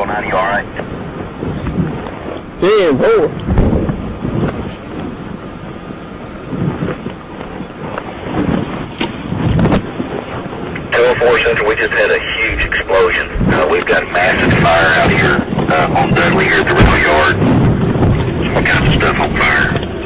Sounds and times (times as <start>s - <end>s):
Speech: 0.0s - 0.8s, 2.6s - 3.4s, 11.0s - 17.4s, 18.5s - 19.8s.